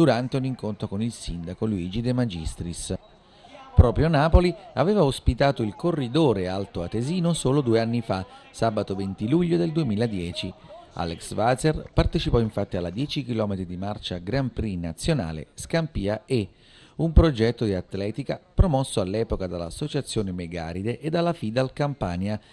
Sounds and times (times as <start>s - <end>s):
Speech: 0.0s - 22.4s.